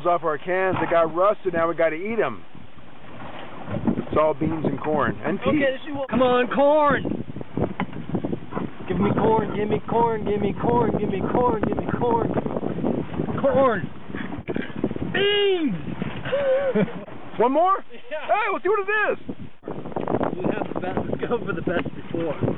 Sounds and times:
Speech: 0.0s - 2.4s, 4.1s - 7.1s, 8.9s - 12.4s, 13.4s - 13.9s, 17.4s - 19.2s
Boat, Water vehicle: 0.0s - 22.5s.

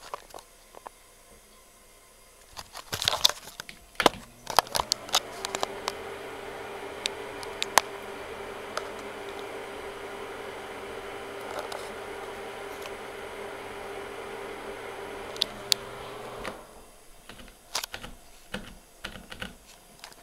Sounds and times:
Mechanical fan: 4.0s - 17.1s.

